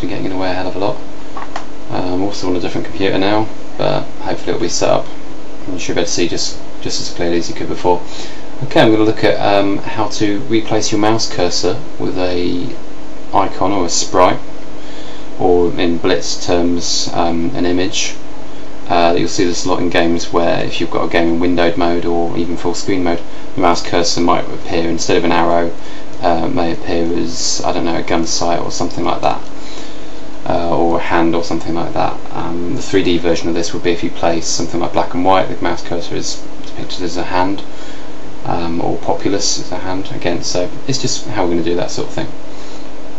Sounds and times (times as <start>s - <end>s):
Speech: 0.0s - 1.0s, 1.9s - 14.5s, 15.4s - 18.2s, 18.9s - 29.5s, 30.4s - 37.7s, 38.4s - 42.4s.